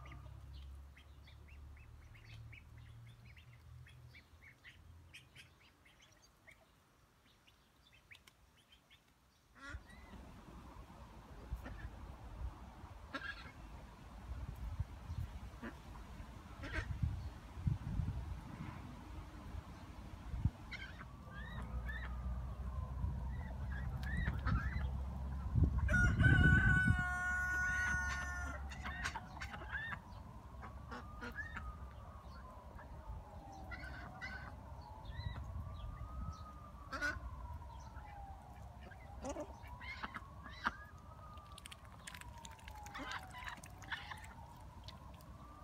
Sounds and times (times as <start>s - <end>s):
Livestock, farm animals, working animals: 0.0s - 10.2s, 13.1s - 13.6s, 16.6s - 16.9s, 23.3s - 35.5s, 36.4s - 37.2s, 38.5s - 45.6s.